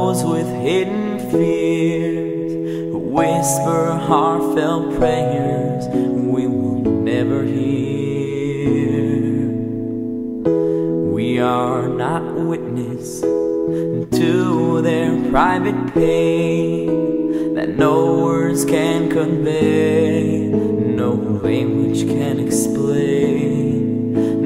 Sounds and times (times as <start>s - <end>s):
Music: 0.0s - 24.4s.